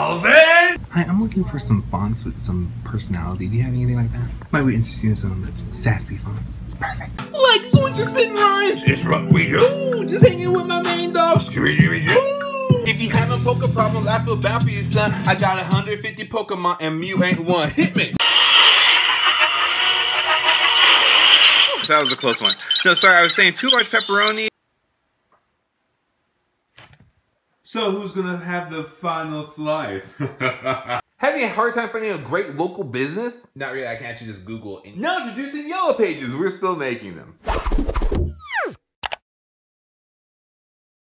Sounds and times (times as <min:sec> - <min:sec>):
Speech: 0:00.0 - 0:11.3, 0:21.9 - 0:24.5, 0:27.7 - 0:30.2, 0:31.2 - 0:37.4.